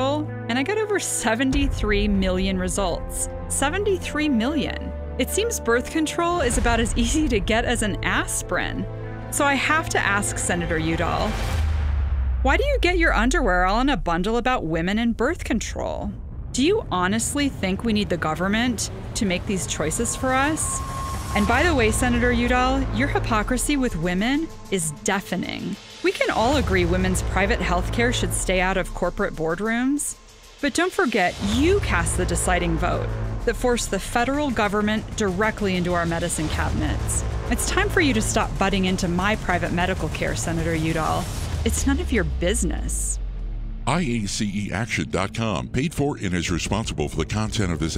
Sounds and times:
Speech: 0:00.0 - 0:11.4, 0:12.5 - 0:20.8, 0:21.4 - 0:43.2, 0:43.9 - 0:47.9
Music: 0:00.0 - 0:47.9.

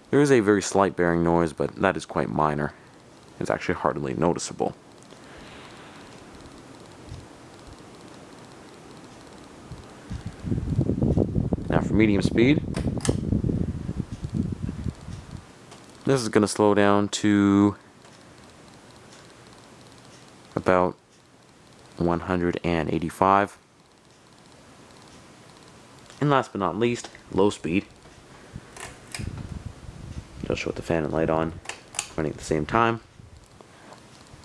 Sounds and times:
Speech: 0:00.1 - 0:02.8, 0:03.4 - 0:04.8, 0:11.7 - 0:12.7, 0:16.0 - 0:17.8, 0:20.6 - 0:21.0, 0:22.0 - 0:23.6, 0:26.2 - 0:27.9, 0:30.4 - 0:31.6, 0:32.2 - 0:33.1.

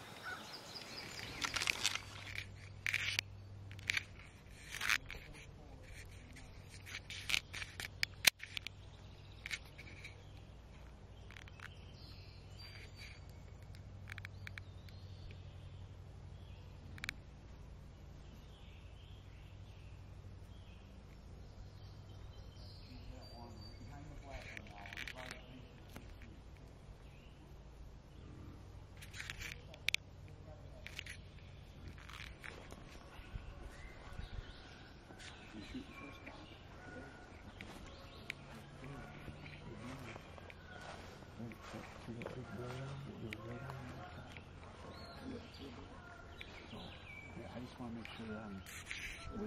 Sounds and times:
Animal: 0:00.0 - 0:15.9, 0:16.7 - 0:49.4.

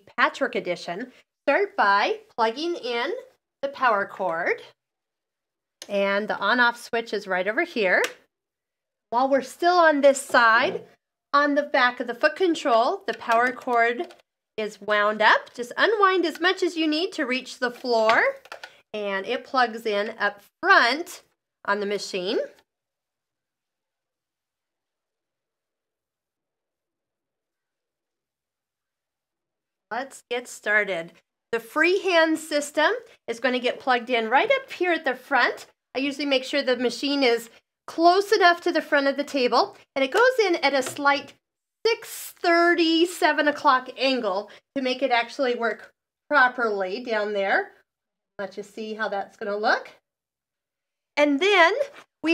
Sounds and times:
Speech: 0:00.0 - 0:04.7, 0:05.8 - 0:08.2, 0:09.2 - 0:18.4, 0:19.0 - 0:22.6, 0:29.9 - 0:41.3, 0:41.9 - 0:47.8, 0:48.4 - 0:50.0, 0:51.2 - 0:52.3.

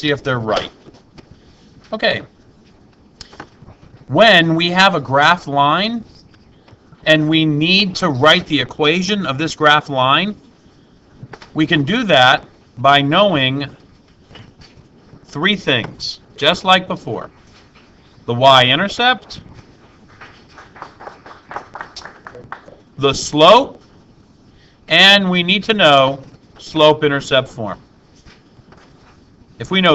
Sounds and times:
Speech: 0:00.0 - 0:00.8, 0:01.9 - 0:02.3, 0:04.1 - 0:06.1, 0:07.1 - 0:10.4, 0:11.6 - 0:13.8, 0:15.3 - 0:17.3, 0:18.3 - 0:19.4, 0:22.3 - 0:23.8, 0:24.9 - 0:27.8, 0:29.6 - 0:29.9.

